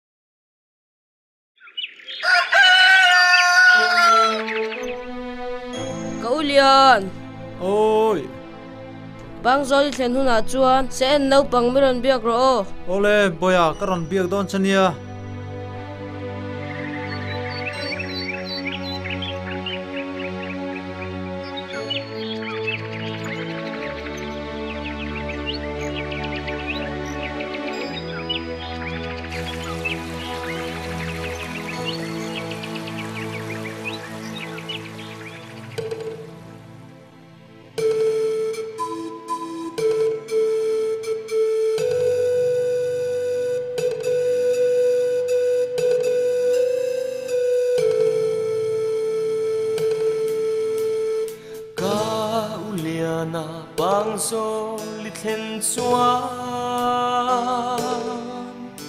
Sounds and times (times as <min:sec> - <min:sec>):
Outside, rural or natural: 0:01.6 - 0:58.8
Music: 0:02.2 - 0:58.8
Speech: 0:09.4 - 0:15.0.